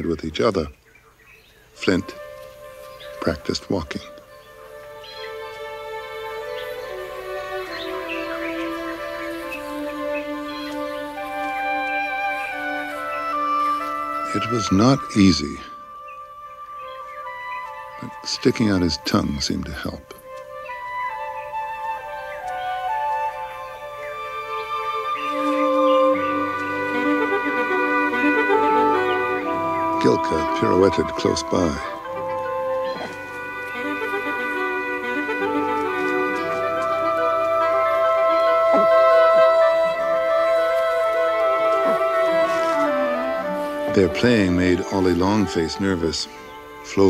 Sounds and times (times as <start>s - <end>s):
Wind instrument, woodwind instrument: 1.7s - 47.0s.